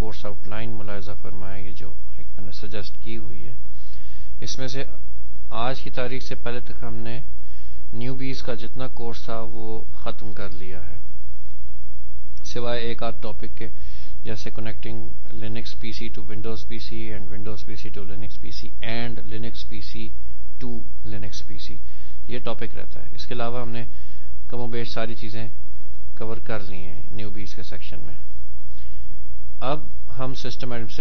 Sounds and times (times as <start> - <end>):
Speech: 0.0 - 3.6, 4.4 - 7.3, 7.9 - 11.0, 12.4 - 23.9, 24.5 - 25.6, 26.2 - 28.3, 29.6 - 31.0.